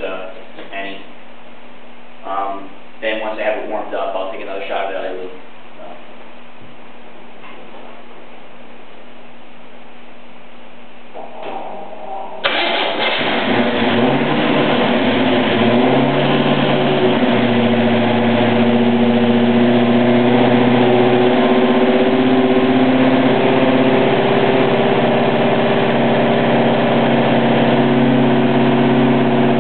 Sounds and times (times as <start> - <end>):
Car: 12.4 - 29.6
Idling: 12.4 - 29.6
Medium engine (mid frequency): 12.4 - 29.6.